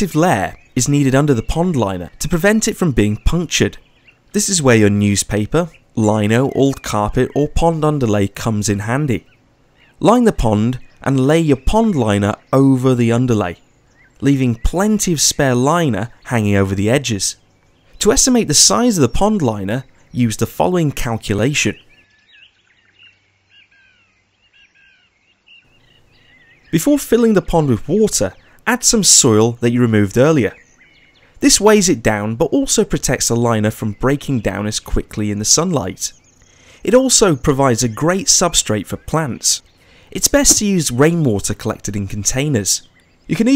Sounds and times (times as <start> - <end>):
Speech: 0.0 - 3.8, 4.4 - 9.3, 10.0 - 13.6, 14.2 - 17.4, 18.0 - 21.9, 26.8 - 30.6, 31.4 - 36.2, 36.8 - 43.5.